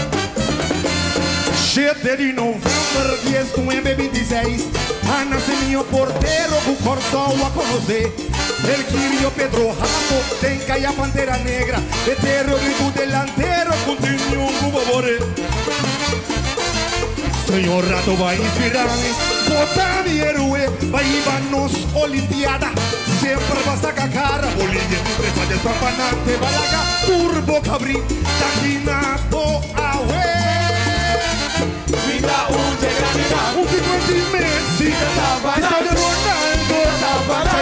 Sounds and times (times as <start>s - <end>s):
Music: 0.0s - 37.6s.